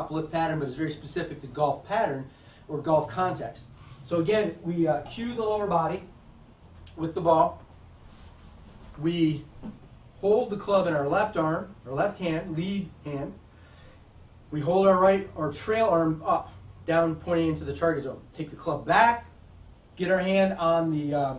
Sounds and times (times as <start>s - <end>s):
Speech: 0.0s - 6.1s, 7.0s - 7.6s, 9.0s - 9.5s, 10.2s - 13.4s, 14.5s - 19.3s, 20.0s - 21.3s.